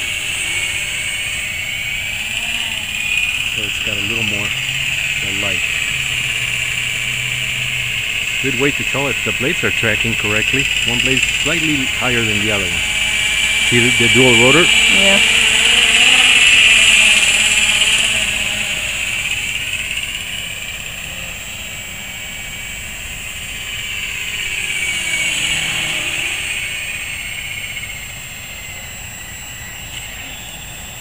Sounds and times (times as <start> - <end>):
Helicopter: 0.0 - 31.0.